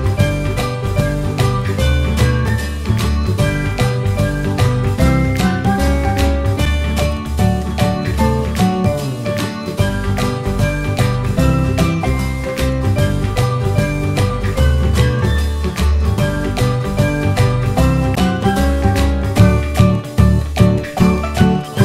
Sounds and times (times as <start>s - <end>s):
Music: 0.0s - 21.8s.